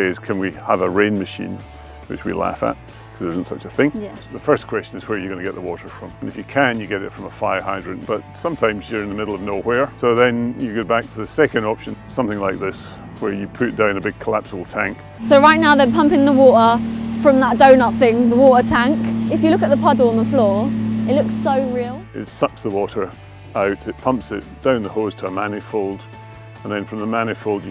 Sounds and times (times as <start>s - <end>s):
Speech: 0.0s - 26.0s, 26.6s - 27.7s
Music: 0.0s - 27.7s.